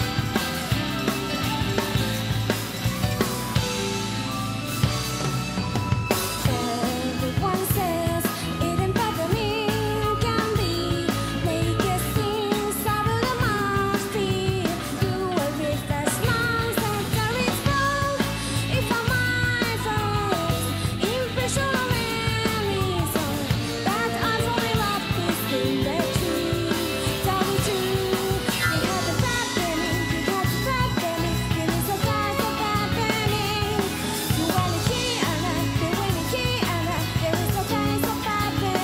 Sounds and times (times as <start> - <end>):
Music: 0.0 - 38.8.